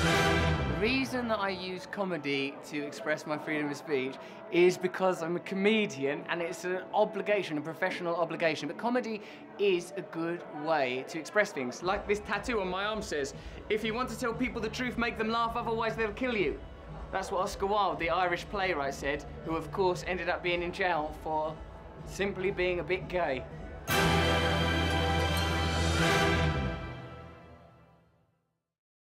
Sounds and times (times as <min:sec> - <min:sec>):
Music: 0:00.0 - 0:28.7
Male speech, man speaking: 0:00.8 - 0:23.5.